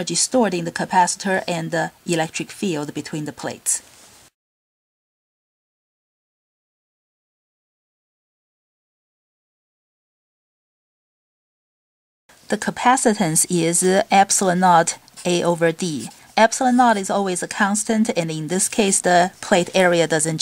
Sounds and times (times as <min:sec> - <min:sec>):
Speech: 0:00.0 - 0:03.8, 0:12.5 - 0:20.4.